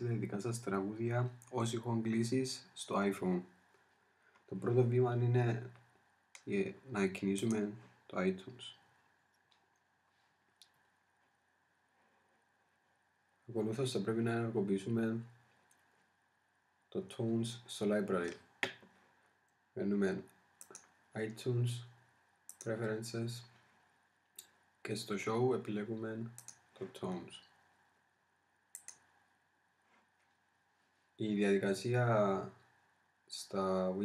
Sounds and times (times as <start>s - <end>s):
Speech: 0.0s - 3.5s, 4.5s - 5.8s, 6.4s - 8.8s, 13.5s - 15.3s, 16.9s - 18.4s, 19.8s - 20.3s, 21.2s - 21.9s, 22.6s - 23.5s, 24.8s - 27.5s, 31.2s - 32.6s, 33.3s - 34.0s.